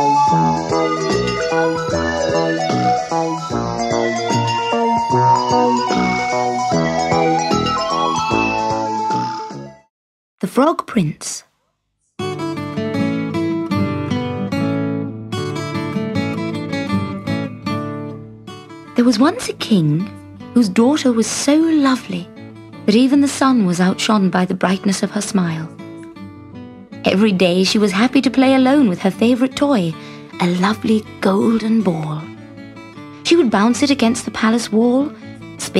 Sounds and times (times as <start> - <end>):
Music: 0.0 - 9.9, 11.8 - 35.7
Speech: 10.4 - 11.5, 19.0 - 22.3, 22.9 - 25.7, 27.0 - 32.3, 33.2 - 35.7.